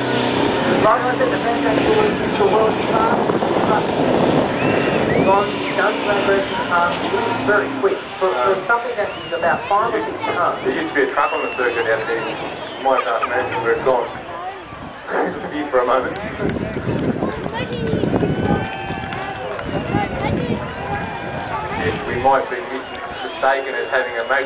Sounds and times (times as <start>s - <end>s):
Speech: 5.2s - 14.3s, 21.6s - 24.4s.